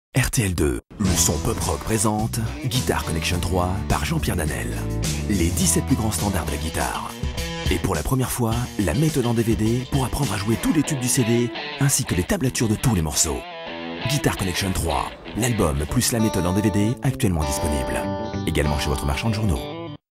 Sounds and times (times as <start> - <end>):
Speech: 0.1 - 13.4, 14.0 - 19.7
Electric guitar: 8.9 - 20.0.